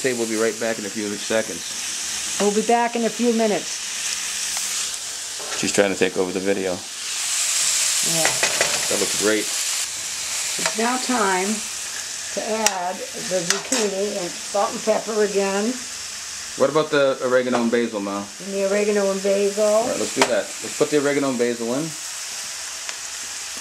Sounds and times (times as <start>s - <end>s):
Frying (food): 0.0s - 23.6s.